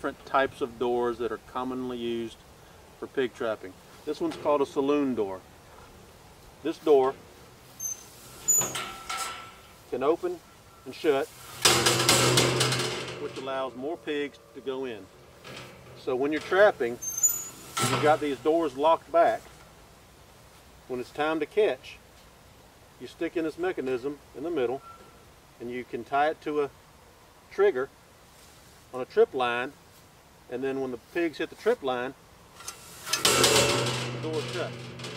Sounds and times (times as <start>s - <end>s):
Speech: 0.0s - 2.4s, 3.0s - 5.4s, 6.6s - 7.2s, 9.9s - 11.3s, 13.1s - 15.1s, 16.0s - 17.1s, 17.8s - 19.5s, 20.9s - 22.0s, 23.0s - 24.8s, 25.6s - 26.8s, 27.5s - 28.0s, 28.9s - 29.8s, 30.5s - 32.2s, 34.0s - 34.8s.